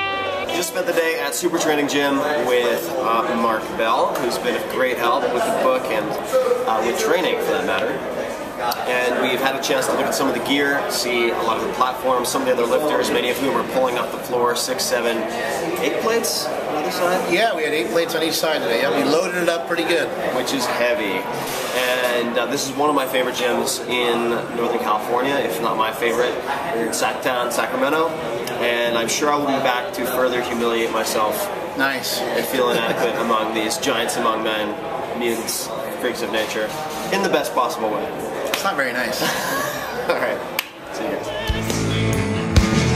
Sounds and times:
Speech: 0.5 - 39.3.

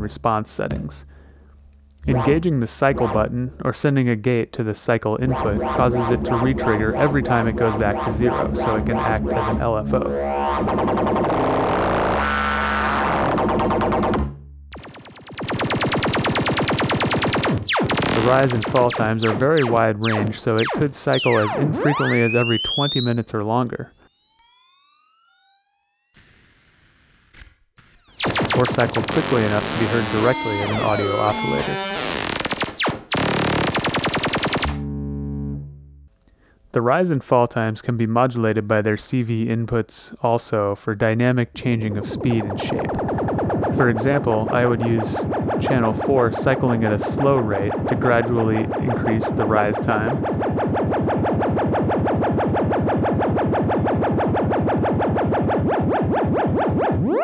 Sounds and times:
Speech: 0.0 - 1.1, 2.0 - 10.2, 18.1 - 23.9, 28.5 - 31.8, 36.7 - 43.0, 43.7 - 50.2
Synthesizer: 5.2 - 26.8, 27.8 - 35.6, 56.8 - 57.2.

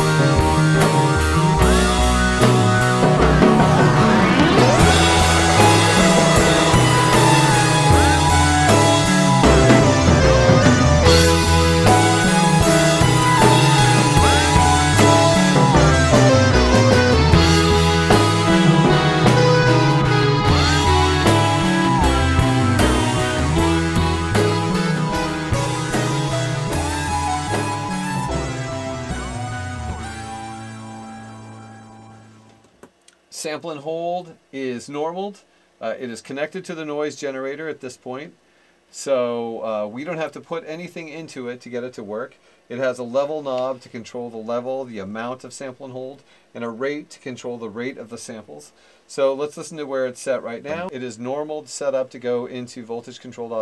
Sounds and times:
Synthesizer: 0.0 - 32.8.

